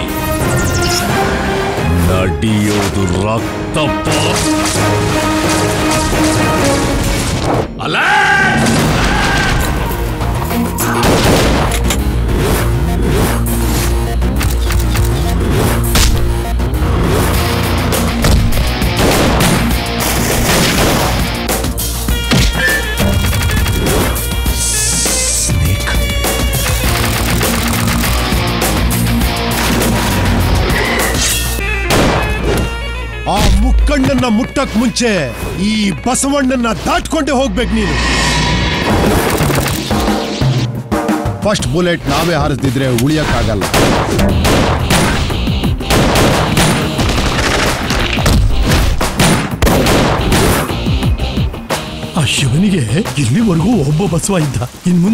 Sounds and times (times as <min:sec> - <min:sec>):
Music: 0:00.0 - 0:55.1.